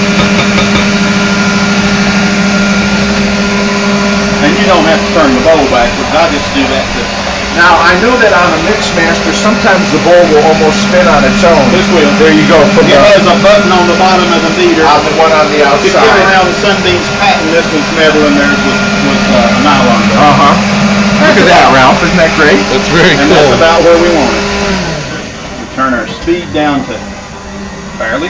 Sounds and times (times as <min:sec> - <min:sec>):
Blender: 0:00.0 - 0:28.3
Speech: 0:04.4 - 0:20.6, 0:21.2 - 0:24.4, 0:25.7 - 0:27.0, 0:28.0 - 0:28.3.